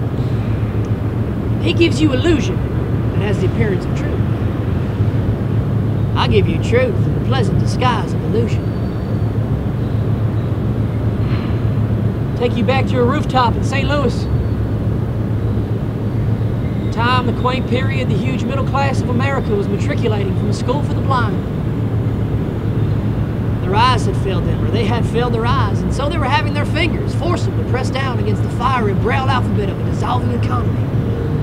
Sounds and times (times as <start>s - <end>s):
Speech: 1.6s - 2.6s, 3.2s - 4.2s, 6.2s - 8.6s, 12.4s - 14.3s, 16.9s - 21.4s, 23.6s - 30.8s.